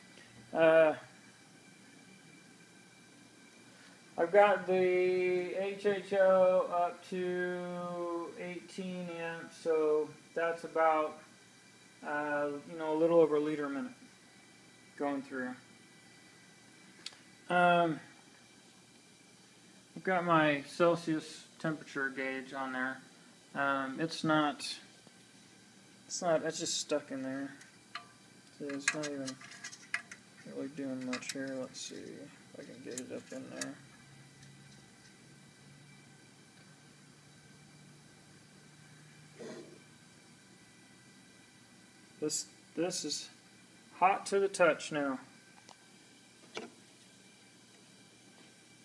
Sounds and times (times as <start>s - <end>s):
Speech: 0.6s - 1.1s, 4.2s - 11.2s, 12.0s - 14.0s, 15.0s - 15.6s, 20.0s - 23.0s, 23.6s - 24.9s, 26.1s - 27.6s, 28.6s - 29.4s, 30.4s - 33.8s, 42.2s - 43.4s, 44.0s - 45.3s.